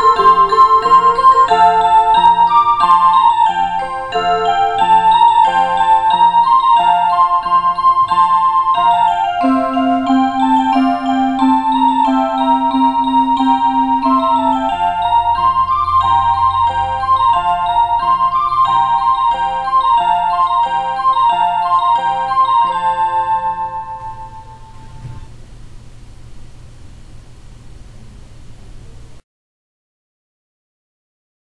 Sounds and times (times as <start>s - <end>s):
Music: 0.0s - 25.3s.